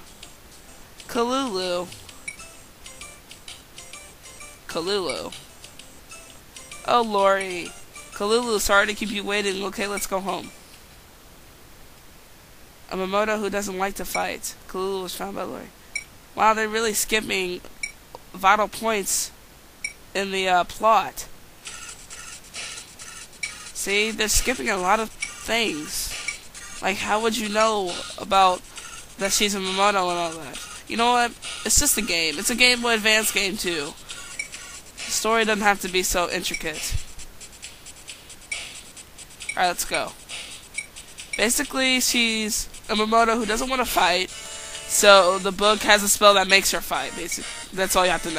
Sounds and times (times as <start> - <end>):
Speech: 1.1 - 1.9, 4.7 - 5.4, 6.9 - 10.5, 12.9 - 15.7, 16.4 - 19.3, 20.2 - 21.3, 23.8 - 26.2, 26.8 - 28.6, 29.2 - 34.0, 35.1 - 37.0, 39.6 - 40.2, 41.4 - 44.3, 44.9 - 48.3.